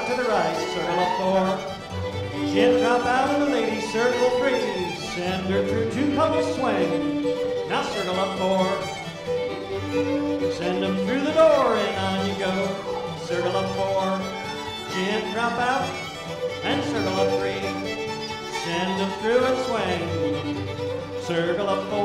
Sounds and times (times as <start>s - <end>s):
Music: 0.0s - 22.0s.